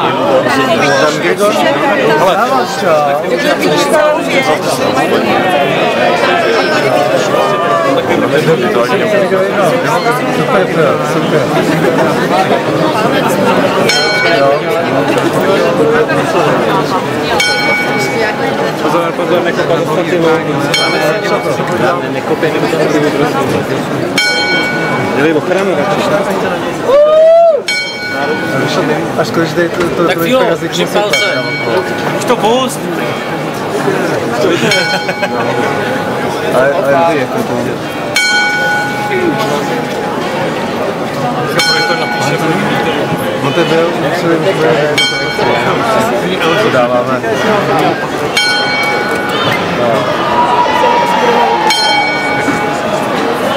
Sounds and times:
Speech: 0.0s - 27.0s, 27.7s - 53.5s.

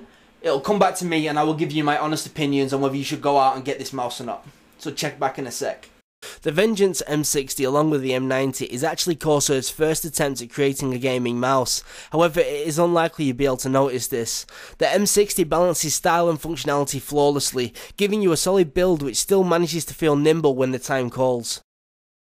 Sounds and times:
Speech: 0.4s - 21.7s.

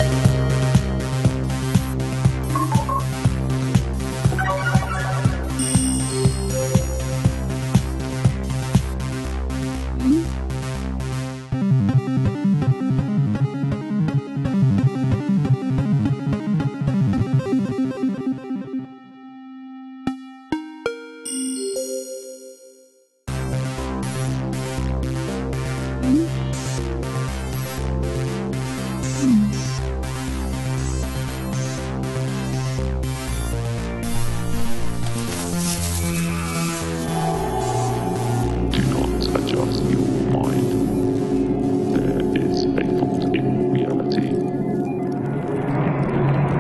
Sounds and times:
Music: 0.0s - 46.6s.

